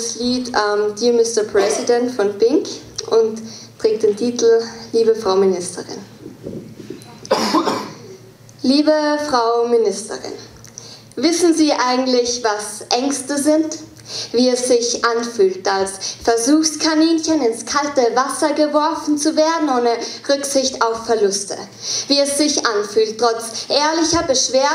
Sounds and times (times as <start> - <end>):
Speech: 0.0 - 6.1, 8.6 - 10.5, 11.2 - 24.7.